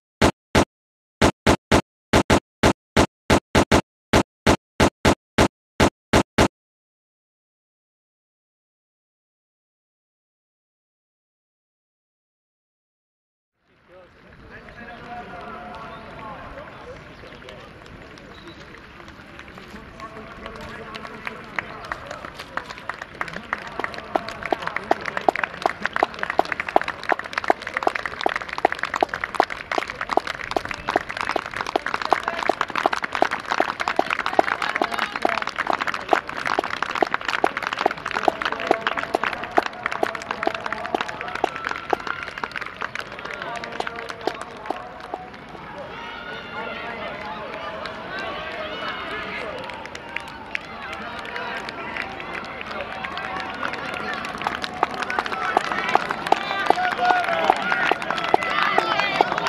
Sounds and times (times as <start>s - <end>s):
Speech: 13.7s - 28.3s, 29.8s - 32.7s, 33.6s - 42.3s, 43.0s - 59.4s.